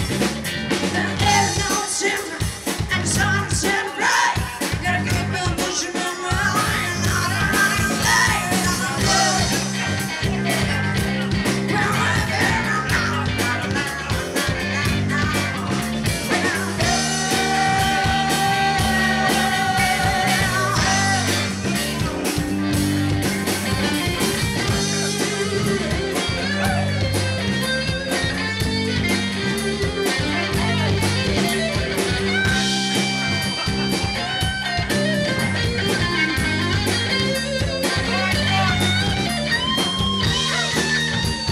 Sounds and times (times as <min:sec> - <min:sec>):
Rhythm and blues: 0:00.0 - 0:41.5.